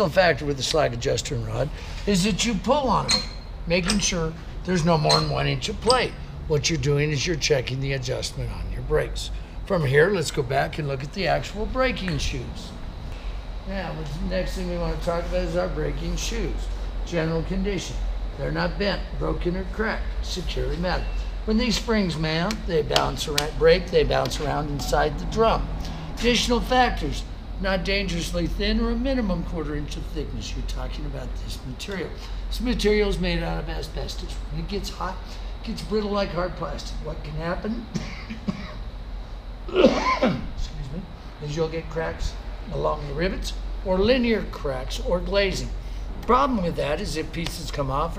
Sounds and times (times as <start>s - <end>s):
Speech: 0.0s - 12.8s, 13.7s - 37.9s, 39.8s - 48.1s.